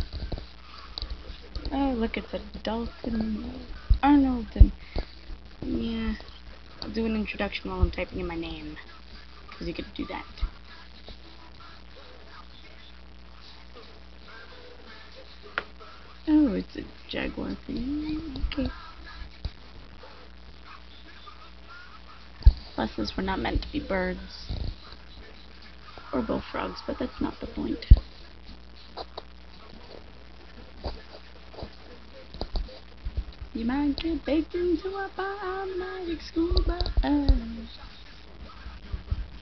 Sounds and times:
Speech: 1.6 - 4.8, 5.6 - 8.9, 9.5 - 10.5, 16.3 - 18.9, 22.8 - 24.5, 26.1 - 28.0, 33.6 - 37.8.

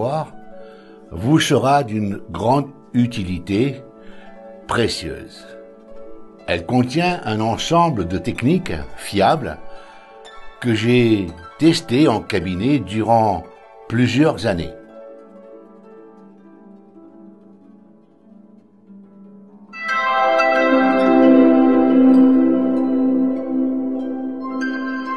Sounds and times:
Speech: 0.0 - 0.4, 1.1 - 3.8, 4.7 - 5.5, 6.5 - 9.6, 10.6 - 14.8
Music: 0.0 - 25.1.

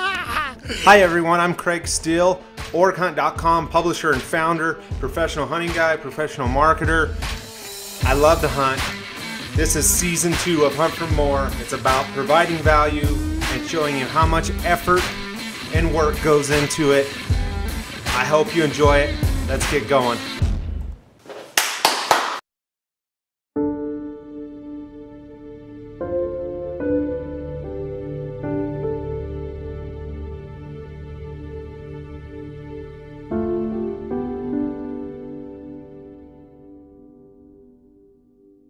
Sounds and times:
Music: 0.0 - 21.0, 23.6 - 38.6
Speech: 0.8 - 7.1, 8.0 - 8.9, 9.6 - 15.1, 15.7 - 17.1, 18.1 - 20.3.

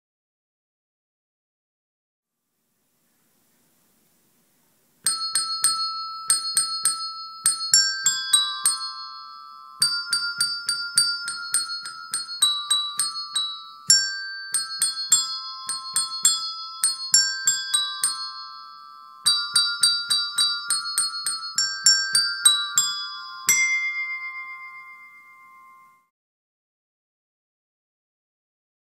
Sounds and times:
Jingle (music): 5.1 - 26.1.

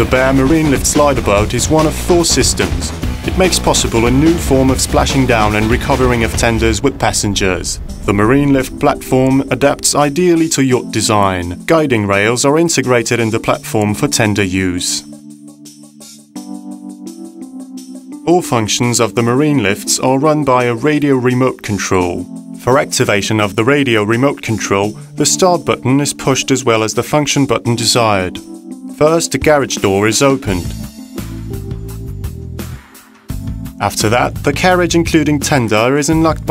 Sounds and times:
Speech: 0.0 - 15.1, 18.2 - 28.4, 29.0 - 30.8, 33.8 - 36.5
Music: 0.0 - 36.5.

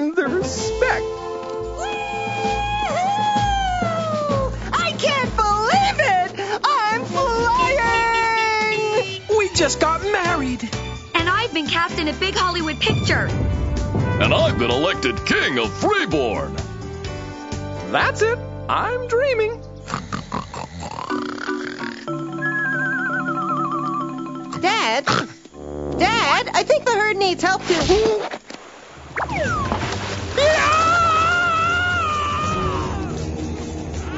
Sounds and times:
Music: 0.0 - 28.2, 29.2 - 34.1
Speech: 14.2 - 16.5.

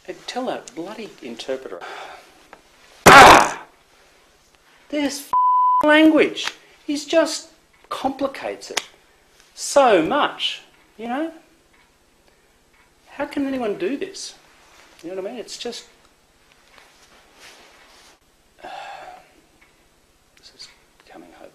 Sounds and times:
Speech: 0.0 - 1.8, 4.9 - 5.3, 5.9 - 8.8, 9.6 - 11.5, 13.1 - 14.4, 15.0 - 16.0, 20.4 - 21.5.

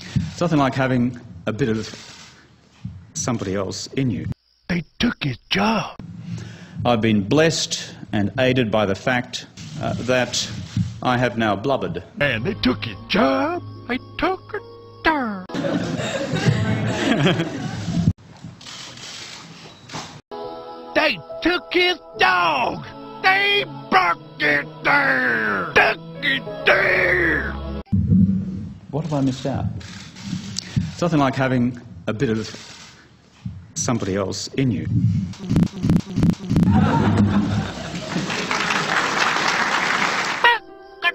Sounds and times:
Narration, monologue: 0.0 - 15.5, 28.6 - 36.7
Male speech, man speaking: 0.4 - 2.0, 3.2 - 6.0, 6.9 - 14.6, 21.0 - 27.6, 28.9 - 29.8, 31.0 - 32.6, 33.8 - 34.9
Music: 12.2 - 16.5, 20.3 - 28.3, 40.4 - 41.1.

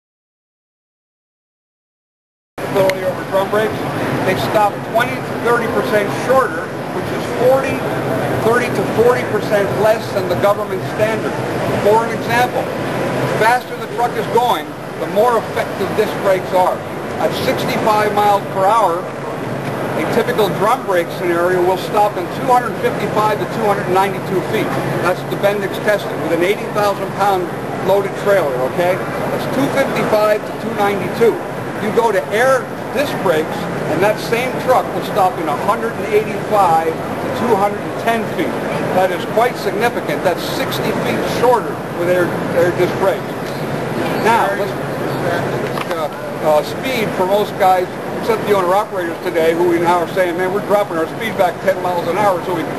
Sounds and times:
Speech: 2.6 - 12.8, 13.4 - 19.2, 20.0 - 52.7.

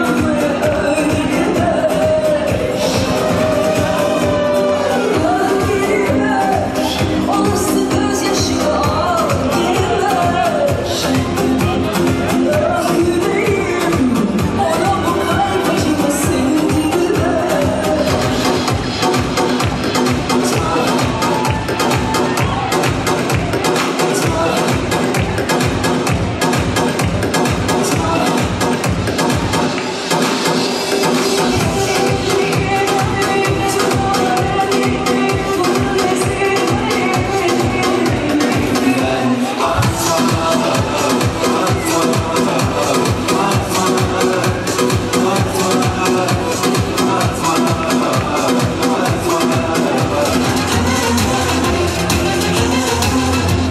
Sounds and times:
Dance music: 0.0 - 53.7.

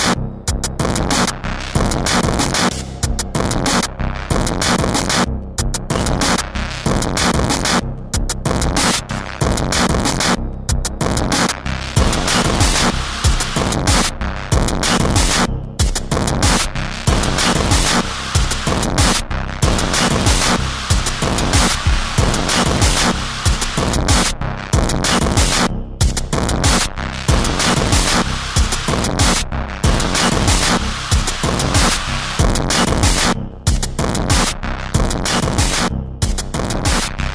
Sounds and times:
Music: 0.0 - 37.3.

